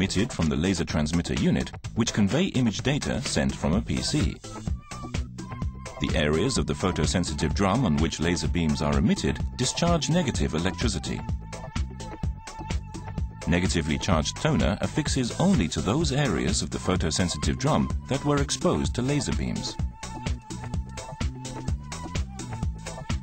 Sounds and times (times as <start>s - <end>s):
Speech: 0.0s - 4.4s, 6.0s - 11.3s, 13.5s - 19.8s
Music: 0.0s - 23.2s.